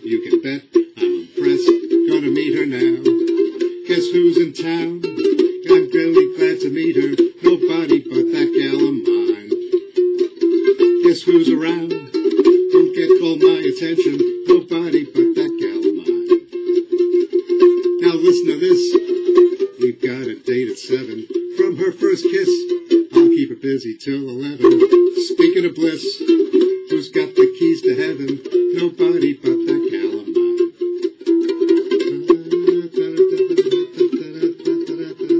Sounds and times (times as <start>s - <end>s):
Inside, small room: 0.0s - 35.4s
Ukulele: 0.0s - 35.4s.